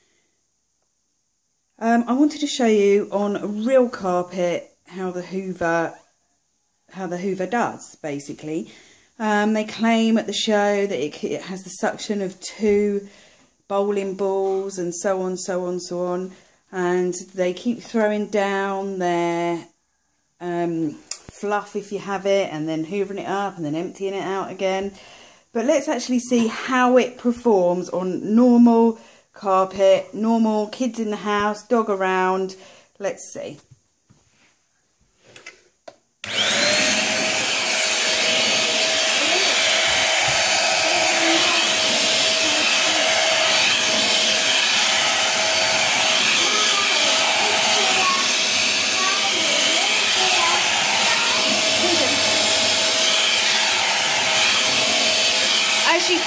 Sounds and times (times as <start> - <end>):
Speech: 1.8 - 6.0, 13.7 - 19.7, 20.4 - 25.0, 25.6 - 33.6, 55.9 - 56.2.